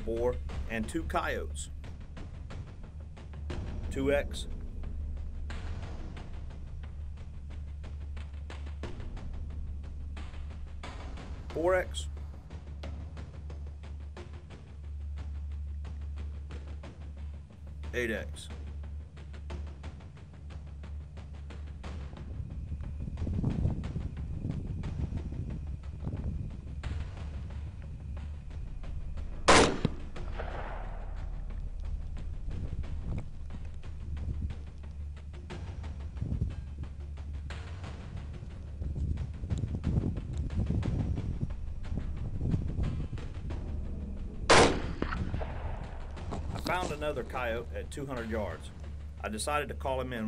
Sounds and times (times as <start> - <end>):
Speech: 0.0 - 1.7, 3.9 - 4.5, 11.5 - 12.1, 17.9 - 18.5, 46.6 - 50.2
Music: 0.0 - 50.2
Outside, rural or natural: 0.0 - 50.2
Gunshot, gunfire: 29.5 - 31.2, 44.5 - 47.0.